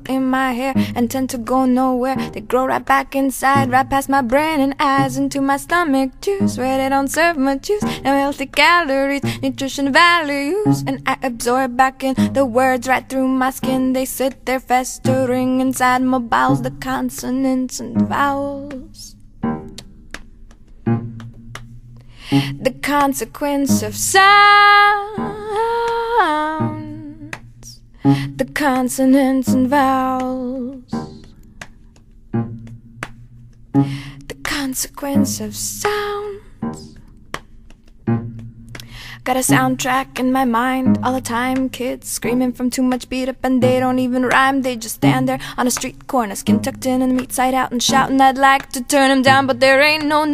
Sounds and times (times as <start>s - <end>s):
Music: 0.0s - 50.3s.